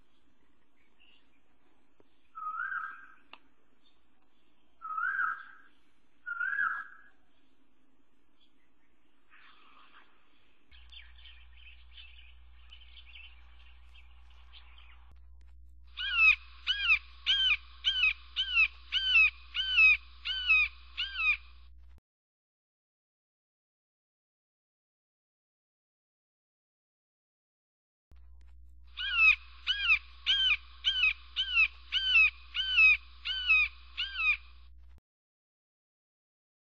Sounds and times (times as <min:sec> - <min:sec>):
Bird: 0:00.0 - 0:07.6, 0:08.4 - 0:15.2, 0:15.9 - 0:21.5, 0:28.9 - 0:34.6.